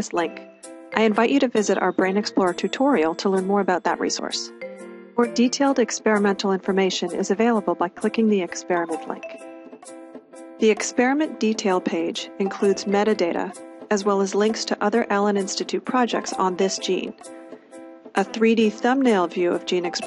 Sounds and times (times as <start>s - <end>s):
Speech: 0.0s - 0.4s, 1.0s - 4.5s, 5.2s - 9.2s, 10.6s - 17.2s, 18.2s - 20.0s
Music: 0.0s - 20.0s.